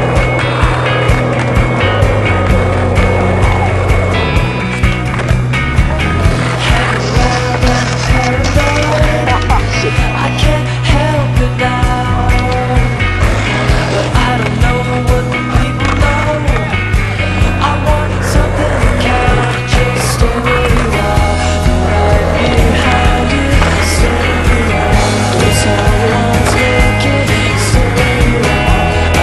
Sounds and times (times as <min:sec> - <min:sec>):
Skateboard: 0:00.0 - 0:29.2.